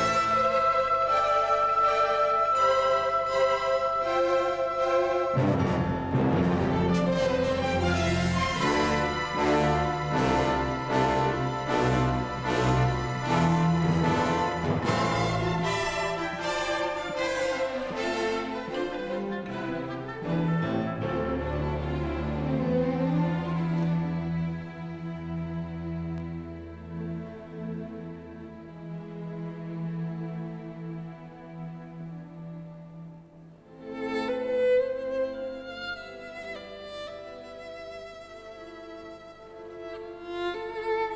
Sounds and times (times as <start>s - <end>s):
Music: 0.0s - 41.1s.